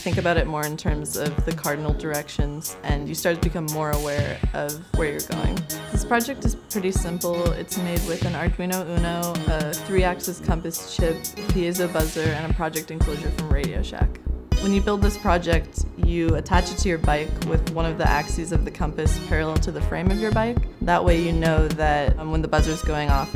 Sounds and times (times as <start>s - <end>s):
Music: 0.0s - 23.3s
Speech: 0.0s - 23.3s.